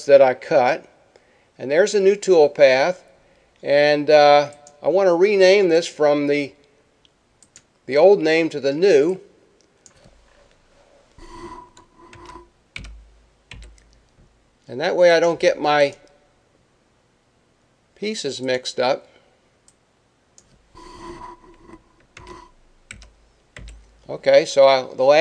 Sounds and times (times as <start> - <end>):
Speech: 0.0 - 0.9, 1.6 - 3.0, 3.6 - 6.6, 7.9 - 9.2, 14.7 - 16.0, 18.0 - 19.1, 24.1 - 25.2.